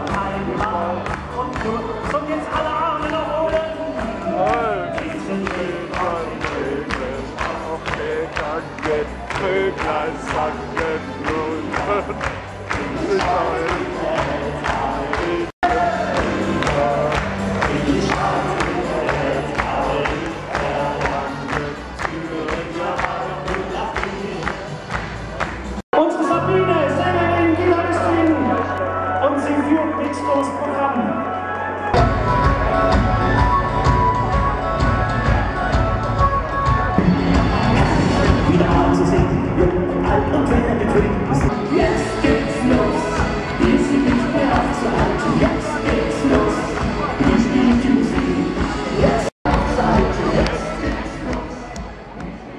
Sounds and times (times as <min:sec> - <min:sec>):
Inside, large room or hall: 0:00.0 - 0:52.5
Inside, public space: 0:00.0 - 0:52.5
Music: 0:00.0 - 0:52.5.